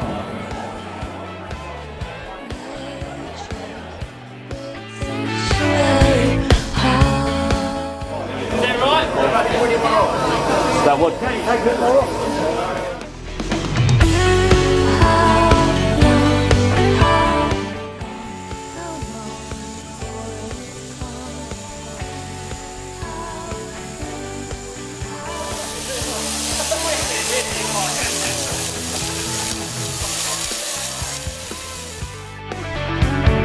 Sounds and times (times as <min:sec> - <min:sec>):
Music: 0:00.0 - 0:33.4
Speech: 0:07.7 - 0:13.1, 0:25.7 - 0:28.6.